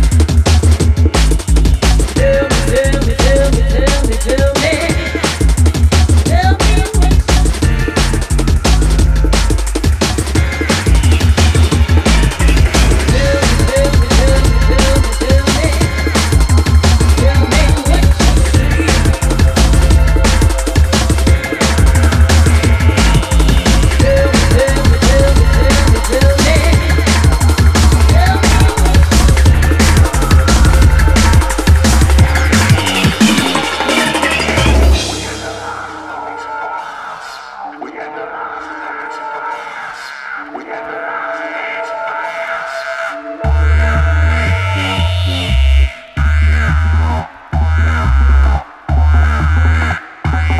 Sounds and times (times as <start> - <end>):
Drum and bass: 0.0 - 39.4, 43.4 - 50.5.